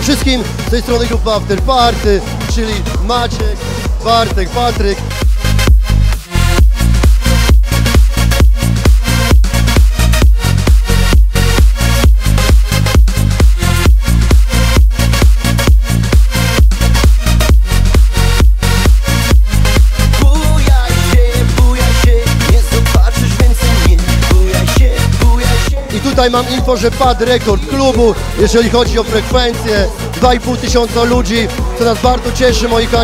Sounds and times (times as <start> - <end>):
Music: 0.0 - 33.0.